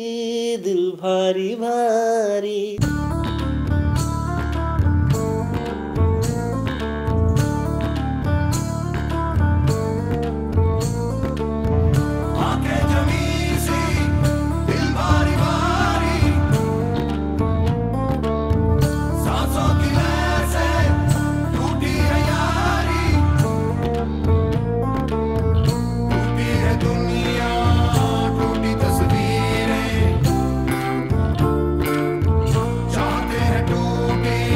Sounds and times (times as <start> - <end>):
Music: 2.8 - 34.5.